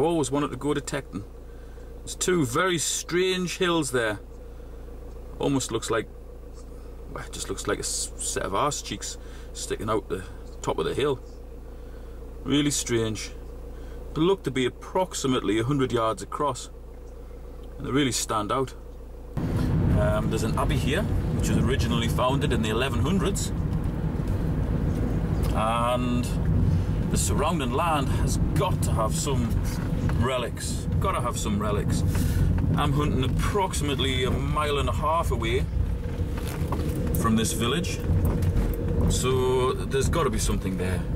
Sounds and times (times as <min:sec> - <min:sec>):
Speech: 0:00.0 - 0:01.3, 0:02.0 - 0:04.3, 0:05.4 - 0:06.1, 0:07.1 - 0:11.3, 0:12.4 - 0:13.4, 0:14.2 - 0:16.8, 0:17.8 - 0:18.8, 0:20.0 - 0:23.5, 0:25.5 - 0:26.4, 0:27.1 - 0:32.1, 0:32.8 - 0:35.7, 0:37.2 - 0:38.0, 0:39.0 - 0:41.1.